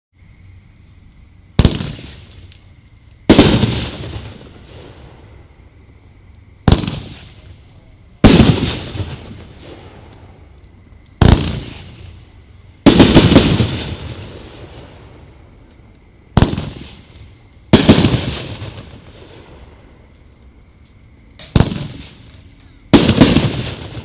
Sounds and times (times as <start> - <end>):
Fireworks: 1.5 - 5.9, 6.6 - 24.0.